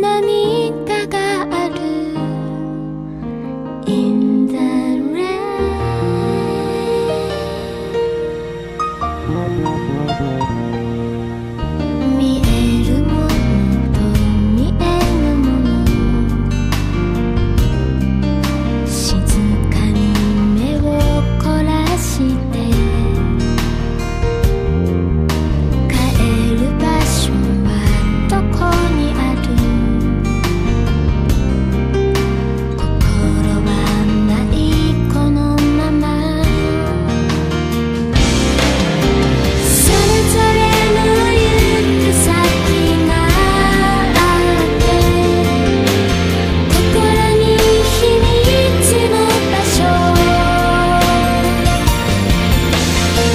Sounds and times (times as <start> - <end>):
Music: 0.0 - 53.3.